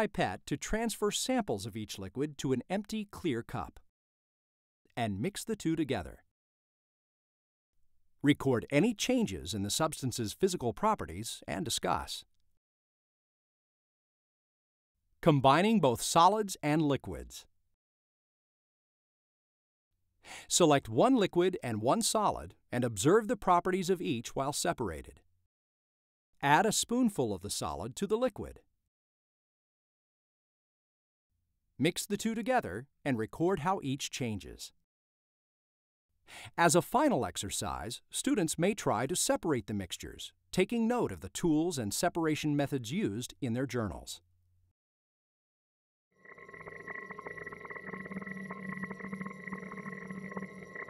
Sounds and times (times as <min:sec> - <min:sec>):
Speech: 0:00.0 - 0:03.8, 0:05.0 - 0:06.3, 0:08.2 - 0:12.3, 0:15.2 - 0:17.5, 0:20.4 - 0:25.2, 0:26.4 - 0:28.6, 0:31.8 - 0:34.8, 0:36.5 - 0:44.2.